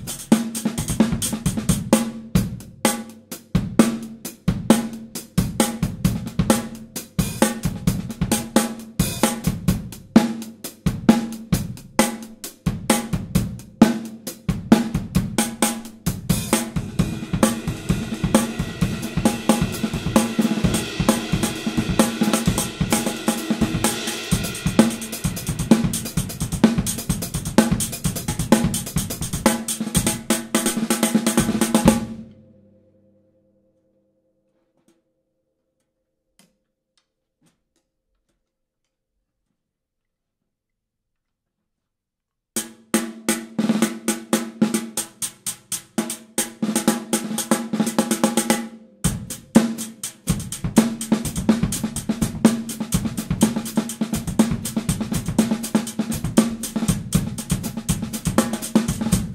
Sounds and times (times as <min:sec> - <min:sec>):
Snare drum: 0:00.0 - 0:02.2, 0:12.9 - 0:32.1, 0:42.6 - 0:59.3
Drum kit: 0:00.0 - 0:32.2, 0:42.6 - 0:59.3
Bass drum: 0:14.5 - 0:32.1, 0:49.1 - 0:49.6, 0:50.2 - 0:59.3.